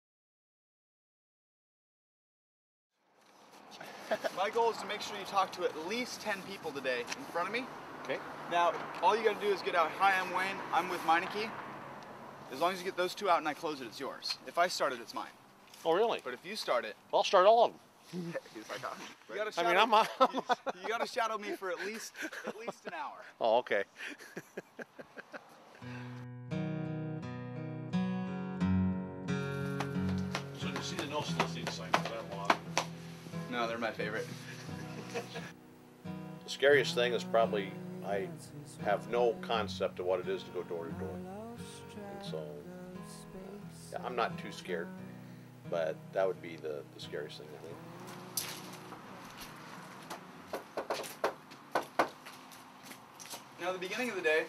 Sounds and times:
Music: 25.9s - 49.0s.

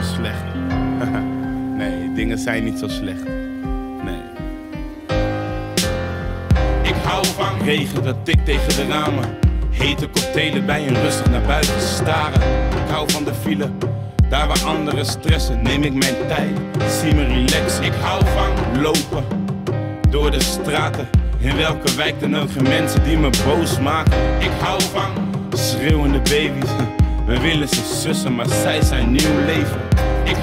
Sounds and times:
Pop music: 0.0s - 30.4s.

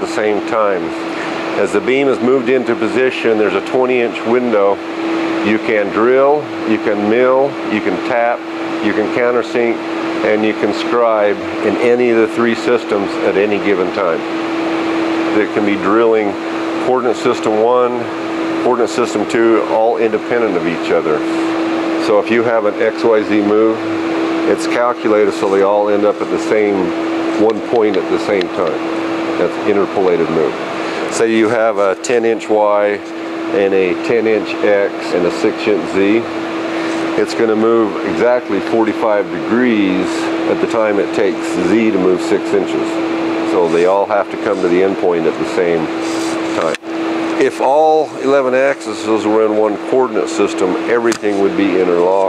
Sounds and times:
Speech: 0.0s - 4.8s, 5.4s - 14.3s, 15.3s - 28.8s, 29.4s - 36.3s, 37.1s - 46.8s, 47.4s - 52.2s.

